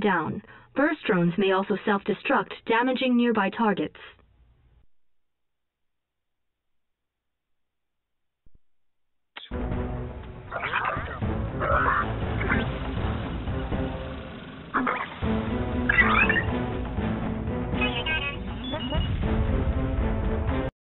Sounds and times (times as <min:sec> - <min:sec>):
Music: 0:09.4 - 0:20.7.